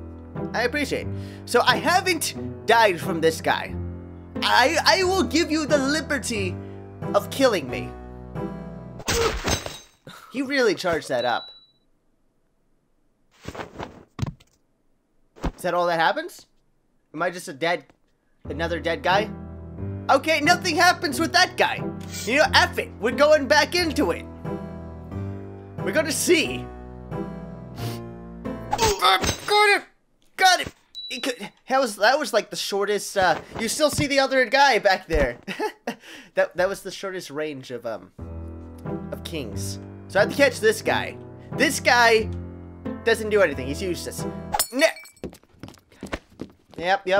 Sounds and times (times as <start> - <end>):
Music: 0.0 - 9.1, 18.4 - 28.9, 38.1 - 44.6
Speech: 0.5 - 3.7, 4.4 - 6.5, 7.1 - 7.9, 10.3 - 11.4, 15.6 - 16.5, 17.2 - 17.9, 18.5 - 19.3, 20.1 - 24.2, 25.8 - 26.7, 28.8 - 35.4, 36.4 - 38.1, 39.1 - 42.3, 43.0 - 45.0, 46.8 - 47.1.